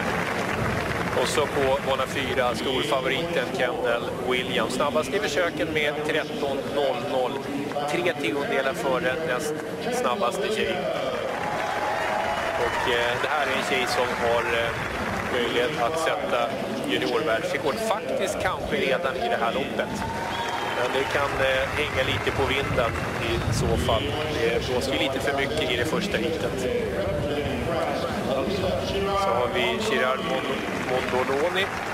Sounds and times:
Outside, urban or manmade: 0.0s - 31.9s
Speech: 1.2s - 11.3s, 12.6s - 20.0s, 20.8s - 31.7s.

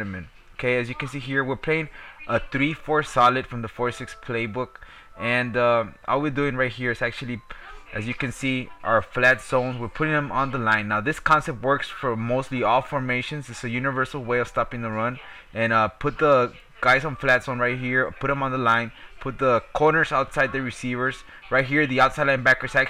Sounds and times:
Music: 0.0s - 22.8s
Speech: 0.0s - 22.8s.

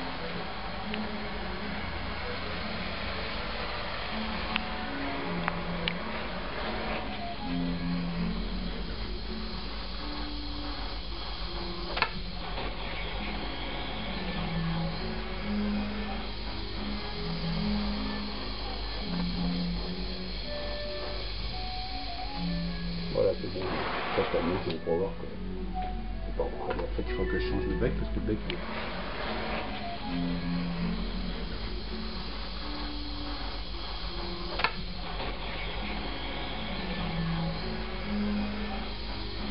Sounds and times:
Music: 0.0s - 39.5s.

